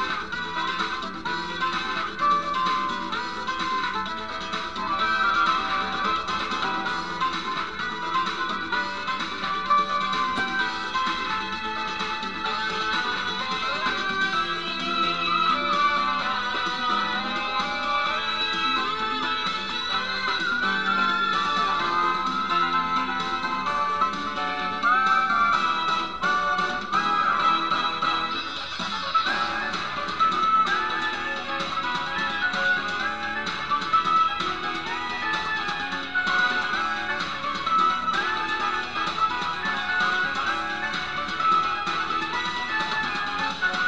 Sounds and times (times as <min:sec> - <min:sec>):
Theme music: 0:00.0 - 0:43.8.